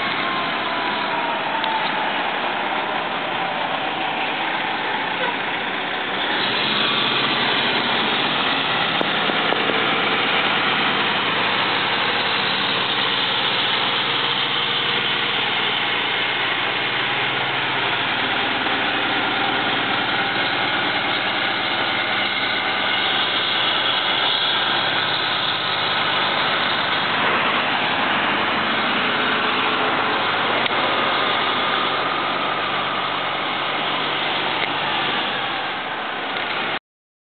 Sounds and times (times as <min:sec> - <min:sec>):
Vehicle: 0:00.0 - 0:36.8.